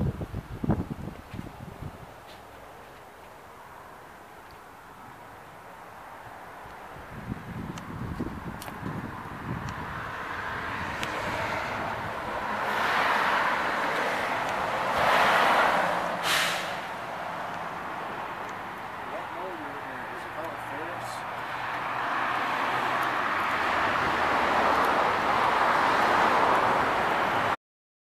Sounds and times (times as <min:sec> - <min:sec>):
Vehicle: 0:00.0 - 0:27.6
Speech: 0:19.1 - 0:21.2.